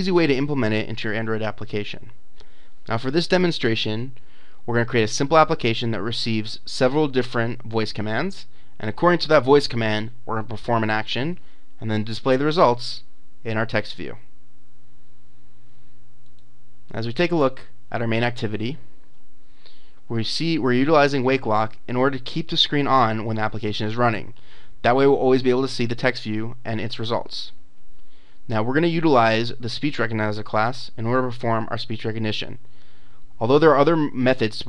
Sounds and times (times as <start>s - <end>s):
Male speech, man speaking: 0.0s - 2.1s, 2.9s - 14.2s, 16.9s - 18.8s, 20.1s - 27.6s, 28.5s - 32.6s, 33.4s - 34.6s
Narration, monologue: 0.0s - 34.6s.